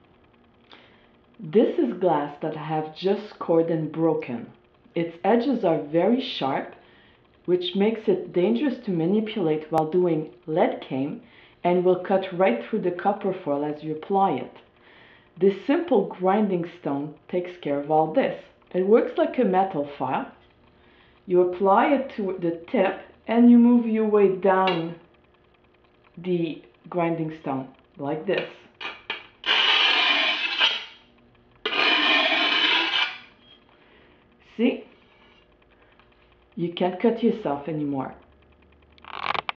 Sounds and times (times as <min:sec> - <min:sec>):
Speech: 0:01.4 - 0:06.8, 0:07.5 - 0:14.6, 0:15.4 - 0:20.4, 0:21.3 - 0:25.0, 0:26.2 - 0:28.7, 0:34.4 - 0:35.0, 0:36.6 - 0:38.3.